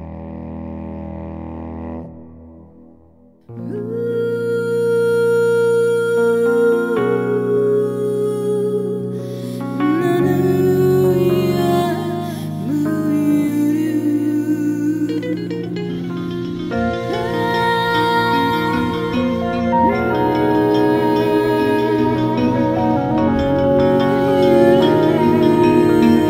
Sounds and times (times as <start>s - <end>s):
Music: 0.0s - 26.3s.